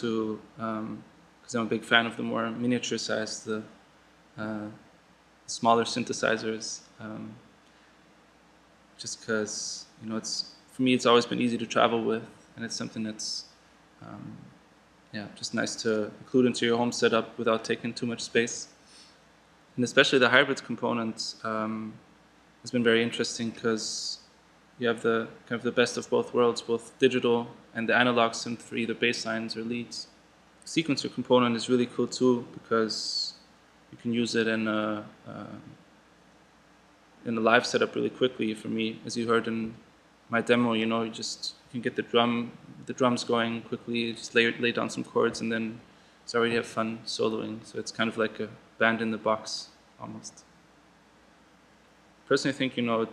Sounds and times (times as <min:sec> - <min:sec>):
Speech: 0:00.0 - 0:03.8, 0:04.4 - 0:04.8, 0:05.5 - 0:07.4, 0:09.0 - 0:14.5, 0:15.2 - 0:18.7, 0:19.8 - 0:22.0, 0:22.7 - 0:24.2, 0:24.8 - 0:30.1, 0:30.7 - 0:33.4, 0:34.0 - 0:35.8, 0:37.2 - 0:50.4, 0:52.3 - 0:53.1.